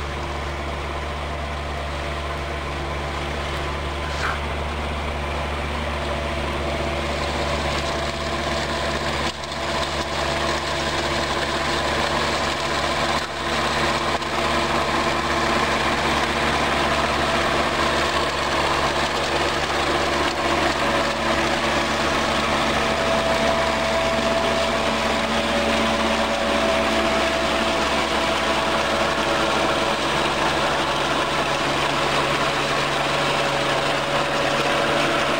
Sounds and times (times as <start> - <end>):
Outside, rural or natural: 0.0 - 35.3
Vehicle: 0.0 - 35.3.